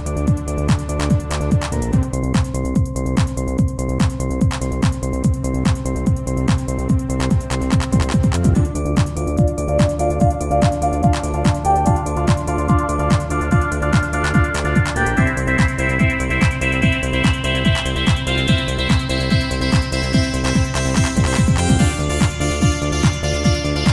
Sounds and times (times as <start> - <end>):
Music: 0.0 - 23.9.